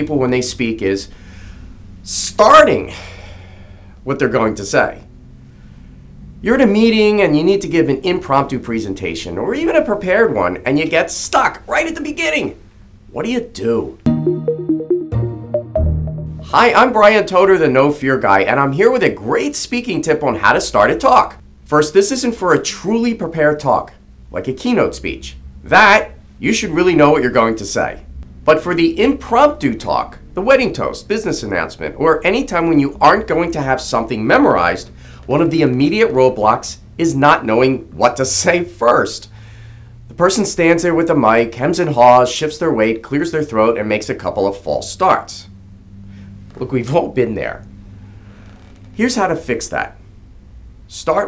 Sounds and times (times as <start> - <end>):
Male speech, man speaking: 0.0 - 1.1, 2.1 - 3.0, 4.0 - 5.0, 6.5 - 14.0, 16.5 - 39.3, 40.1 - 45.5, 46.6 - 47.7, 49.0 - 50.0, 50.9 - 51.2.